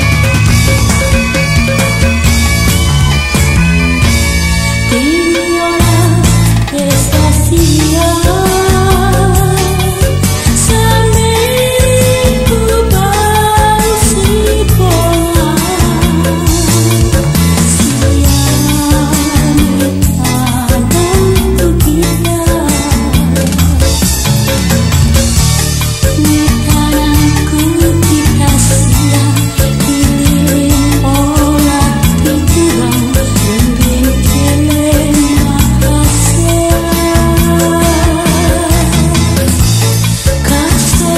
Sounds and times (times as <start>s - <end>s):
Music: 0.0s - 41.1s.